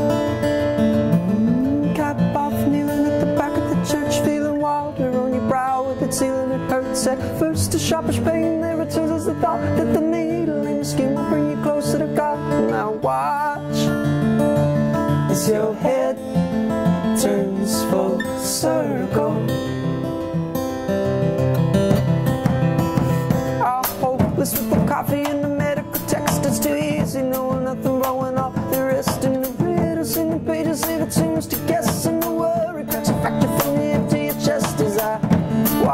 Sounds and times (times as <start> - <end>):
Music: 0.0 - 35.9.